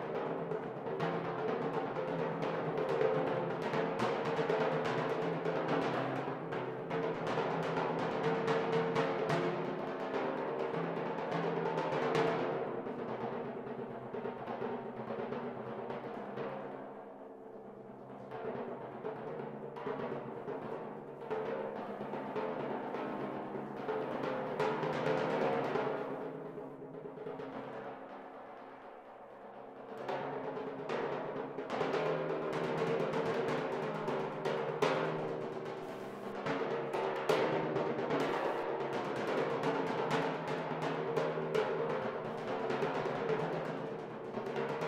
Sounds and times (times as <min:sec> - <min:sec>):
Timpani: 0:18.1 - 0:44.8.